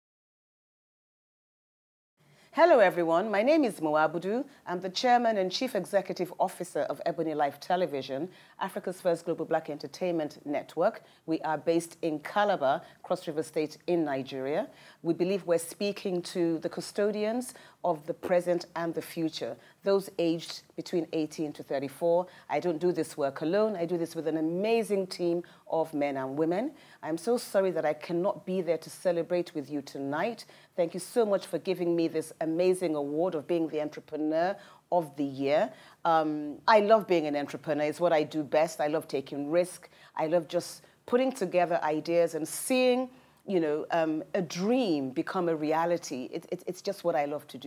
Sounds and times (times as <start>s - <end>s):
Narration, monologue: 2.2s - 47.6s
Female speech, woman speaking: 2.6s - 47.6s.